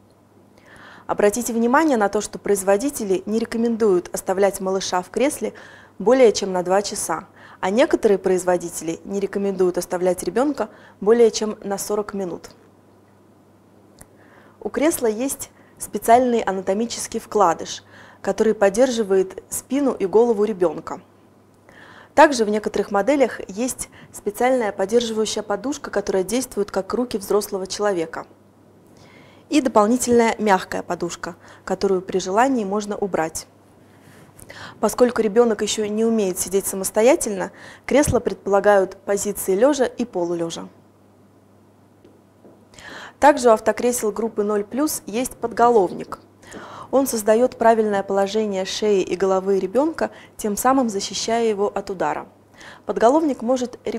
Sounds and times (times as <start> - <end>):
Speech: 1.1 - 12.6, 14.6 - 21.1, 22.2 - 28.3, 29.5 - 33.5, 34.8 - 40.8, 43.2 - 46.2, 46.9 - 52.3, 52.9 - 53.9.